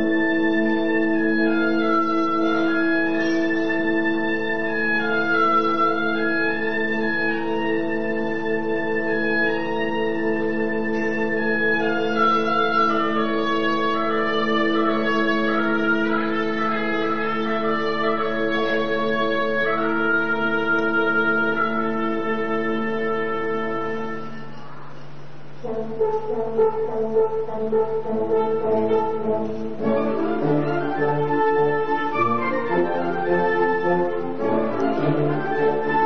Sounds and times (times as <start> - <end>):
Music: 0.0 - 36.0.